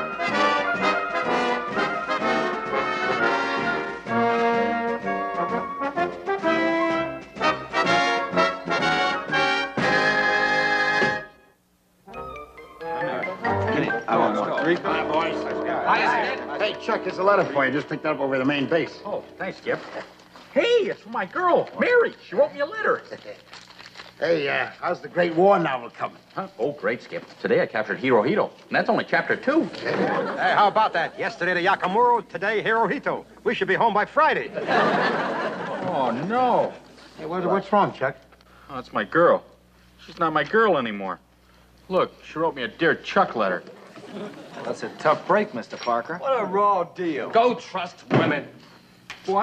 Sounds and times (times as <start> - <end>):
Music: 0.0 - 20.3.